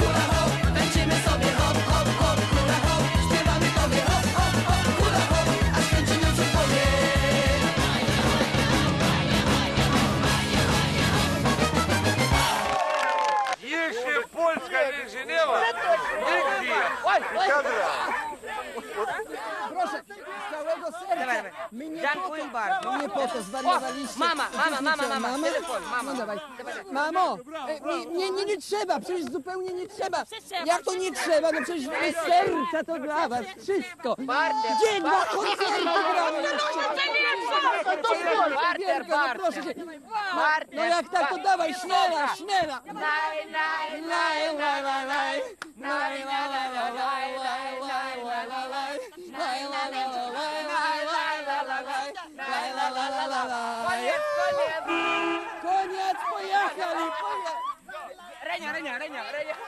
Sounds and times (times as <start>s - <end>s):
Speech: 13.6s - 43.0s.